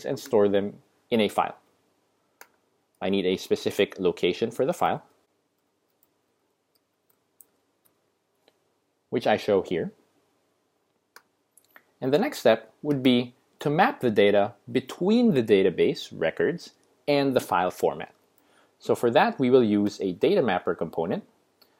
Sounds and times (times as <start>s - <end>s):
Speech: 0.0s - 1.6s, 3.0s - 5.1s, 9.1s - 10.0s, 12.0s - 18.2s, 18.8s - 21.3s.